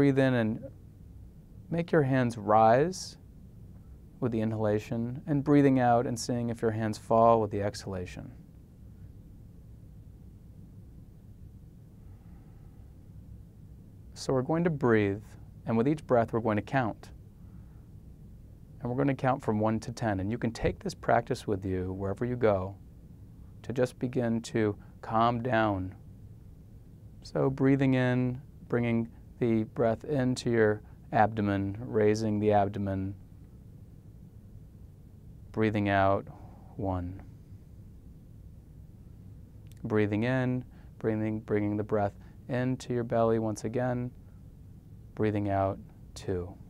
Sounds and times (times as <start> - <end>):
Speech: 0.0 - 0.7, 1.7 - 3.2, 4.2 - 8.4, 14.2 - 17.2, 18.8 - 22.8, 23.6 - 26.0, 27.2 - 33.2, 35.5 - 37.3, 39.7 - 44.2, 45.2 - 46.6.